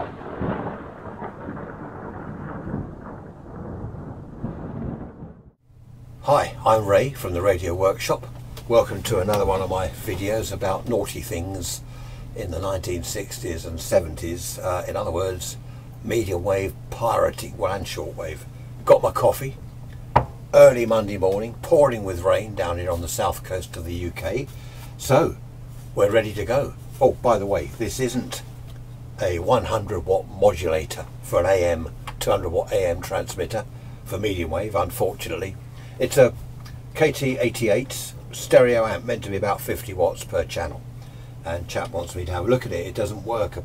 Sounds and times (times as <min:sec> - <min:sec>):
Speech: 0:06.2 - 0:19.6, 0:20.6 - 0:25.4, 0:26.0 - 0:28.5, 0:29.2 - 0:36.4, 0:37.0 - 0:40.8, 0:41.4 - 0:43.6.